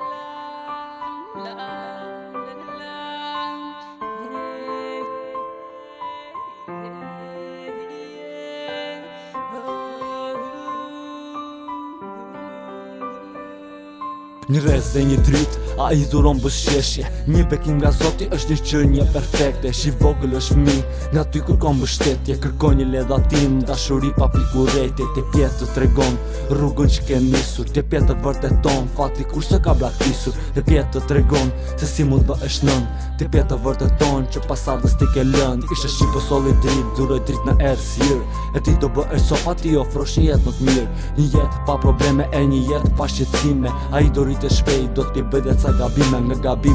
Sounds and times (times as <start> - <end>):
Music: 0.0 - 46.7.